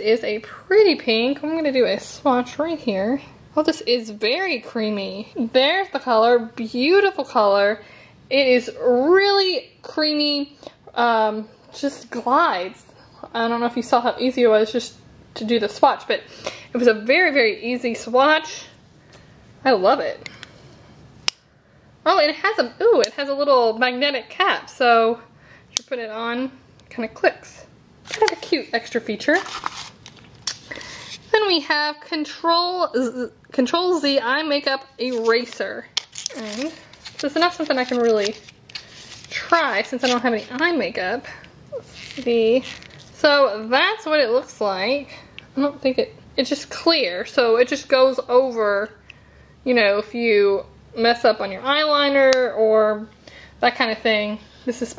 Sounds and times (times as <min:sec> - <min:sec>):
Speech: 0:00.0 - 0:18.7, 0:19.6 - 0:20.2, 0:22.1 - 0:29.5, 0:31.3 - 0:38.4, 0:39.3 - 0:49.0, 0:49.7 - 0:54.9.